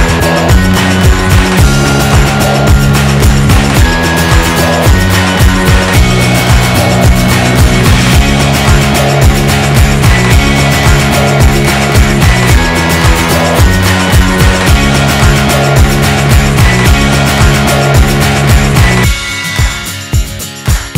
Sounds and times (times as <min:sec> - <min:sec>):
Music: 0:00.0 - 0:20.9.